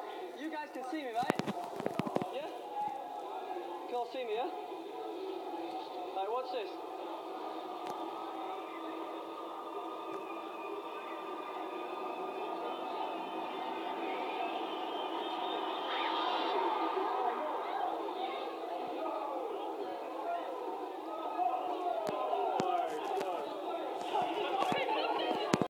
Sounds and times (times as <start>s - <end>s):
Speech: 0.0s - 8.5s, 11.4s - 25.7s.